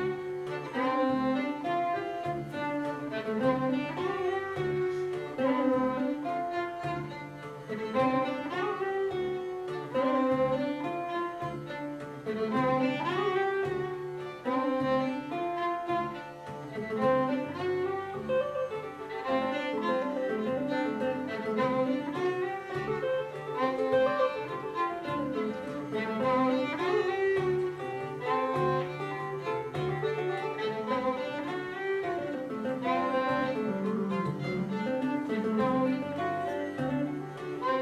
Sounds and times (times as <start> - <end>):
Guitar: 0.0 - 37.8
String section: 0.0 - 37.8
Violin, fiddle: 0.0 - 37.8.